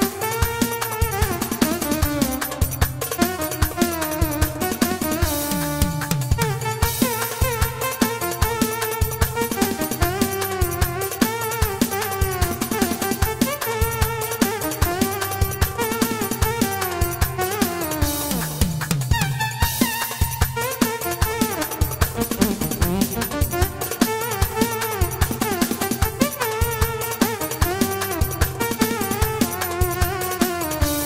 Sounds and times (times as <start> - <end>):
Musical instrument: 0.0 - 31.0.